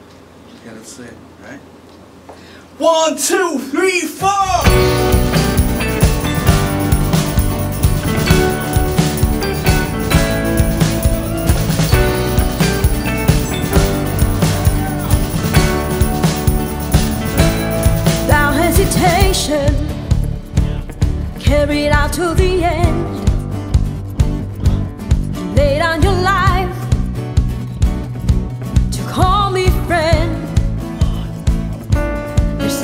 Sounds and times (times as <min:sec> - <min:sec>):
Funk: 0:04.5 - 0:32.6.